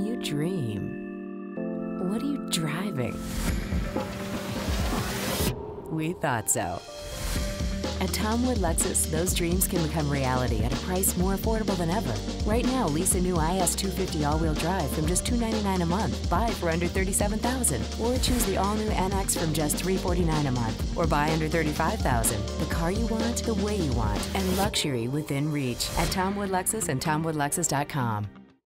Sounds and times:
Speech: 0:00.0 - 0:01.0, 0:02.0 - 0:03.2, 0:05.9 - 0:06.8, 0:08.0 - 0:28.3
Music: 0:00.0 - 0:28.6.

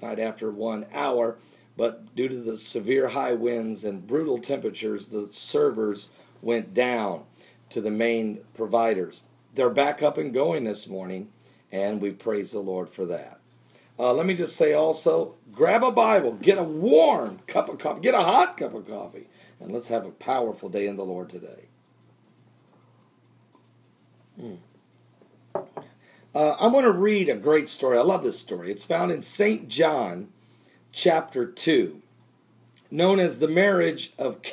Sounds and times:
Speech: 0:00.0 - 0:13.4, 0:14.0 - 0:21.7, 0:26.4 - 0:30.3, 0:31.0 - 0:32.0, 0:32.9 - 0:34.5.

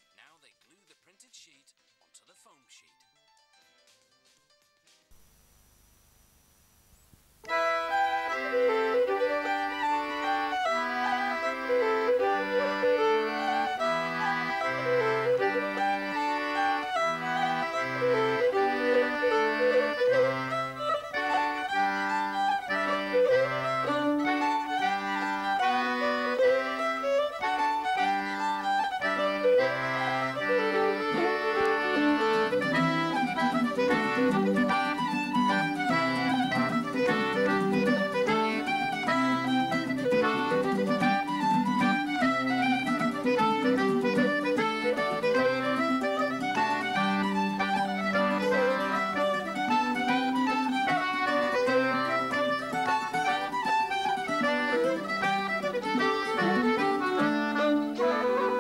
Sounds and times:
Music: 0:00.0 - 0:05.2, 0:07.4 - 0:58.6.

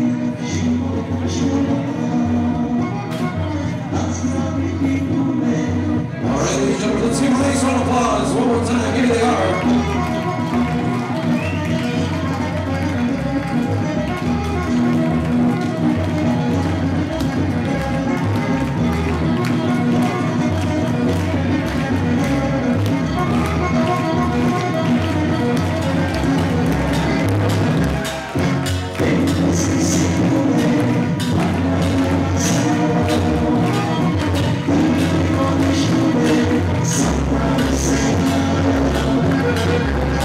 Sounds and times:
Music: 0:00.0 - 0:40.2
Speech: 0:06.2 - 0:09.8.

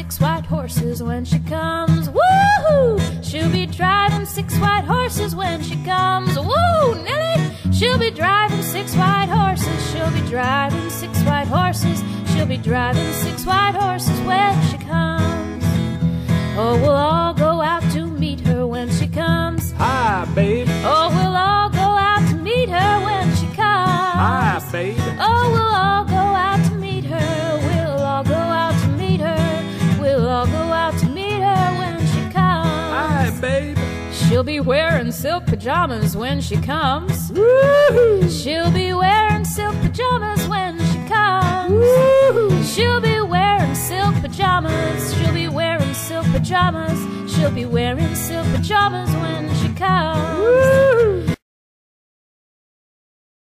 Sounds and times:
Music: 0:00.0 - 0:51.4.

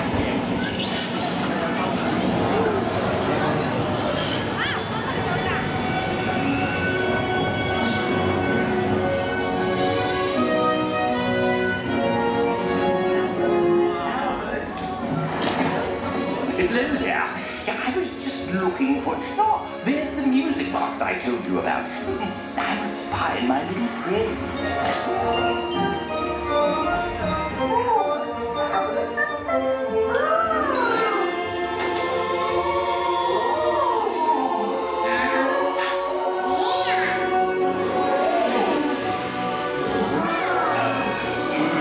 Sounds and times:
Music: 0:00.0 - 0:41.8.

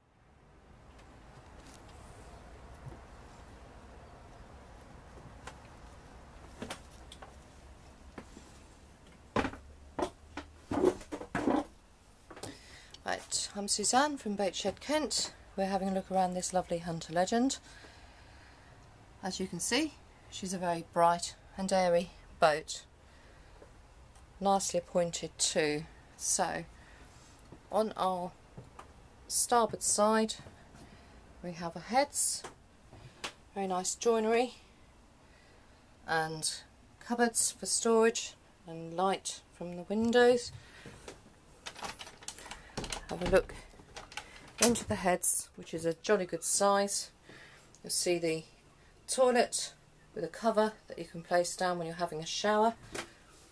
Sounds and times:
Speech: 0:13.0 - 0:17.6, 0:19.2 - 0:22.9, 0:24.4 - 0:26.7, 0:27.7 - 0:28.4, 0:29.3 - 0:30.4, 0:31.4 - 0:32.5, 0:33.6 - 0:34.6, 0:36.1 - 0:40.5, 0:43.1 - 0:43.6, 0:44.6 - 0:47.2, 0:47.8 - 0:48.5, 0:49.1 - 0:52.8.

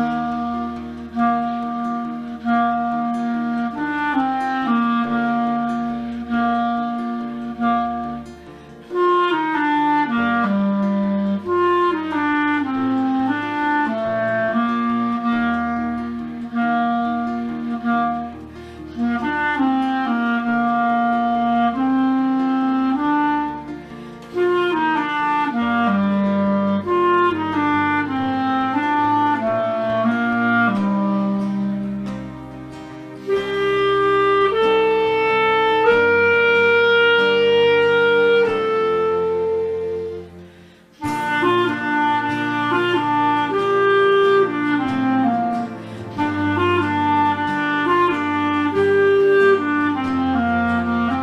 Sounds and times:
Wind instrument, woodwind instrument: 0:00.0 - 0:51.2.

